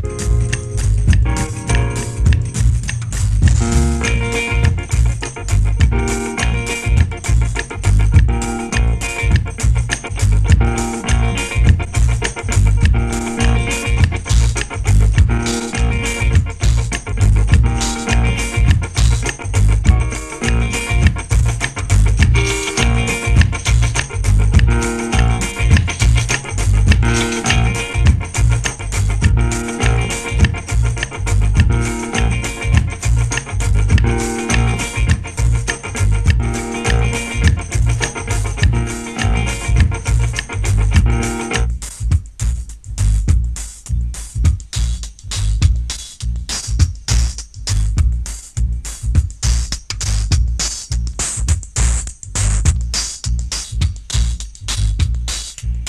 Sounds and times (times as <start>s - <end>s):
Funk: 0.0s - 55.8s.